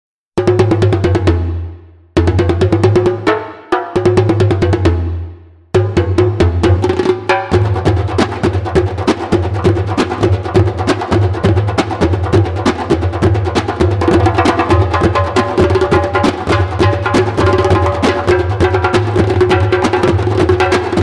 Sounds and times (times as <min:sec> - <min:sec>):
Percussion: 0:00.4 - 0:21.0.